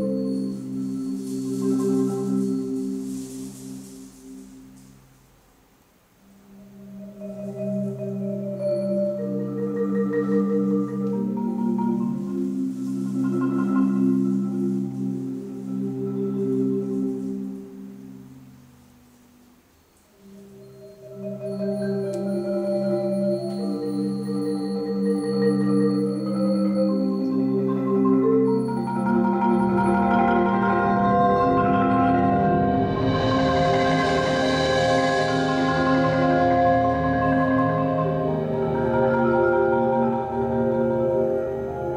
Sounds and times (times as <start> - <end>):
Marimba, xylophone: 0.0 - 5.3, 6.3 - 41.9.